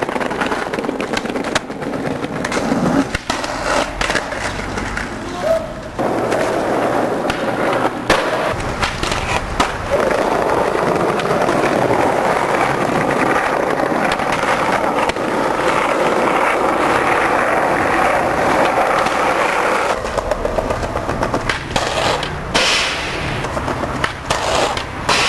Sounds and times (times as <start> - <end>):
Skateboard: 0.0 - 25.2.